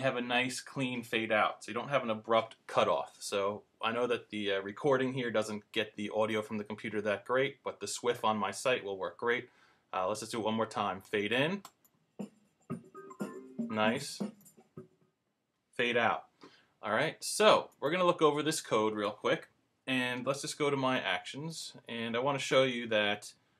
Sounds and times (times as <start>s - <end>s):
Speech: 0.0s - 11.7s, 13.6s - 14.3s, 15.8s - 23.4s
Music: 12.7s - 14.5s.